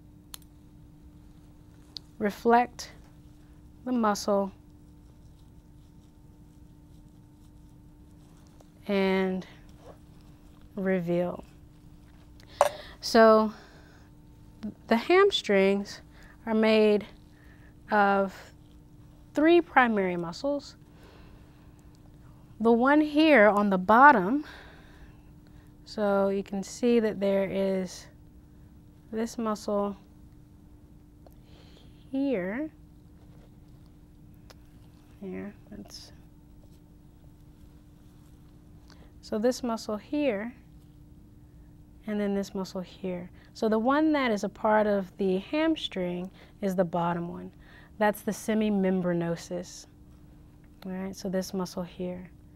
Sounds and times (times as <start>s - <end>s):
Speech: 2.2s - 3.0s, 3.8s - 4.6s, 8.8s - 9.6s, 10.8s - 11.5s, 13.0s - 13.6s, 14.6s - 17.2s, 17.9s - 18.6s, 19.4s - 20.8s, 22.6s - 24.5s, 25.9s - 28.2s, 29.1s - 30.0s, 32.1s - 32.8s, 35.2s - 36.2s, 39.2s - 40.6s, 42.0s - 49.9s, 50.8s - 52.3s.